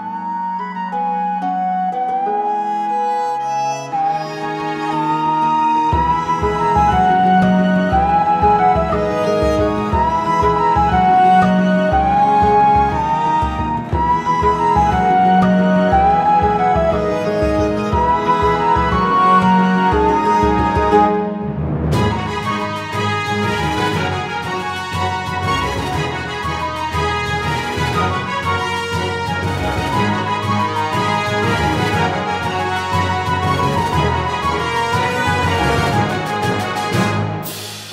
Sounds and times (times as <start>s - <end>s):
Music: 0.0s - 37.9s.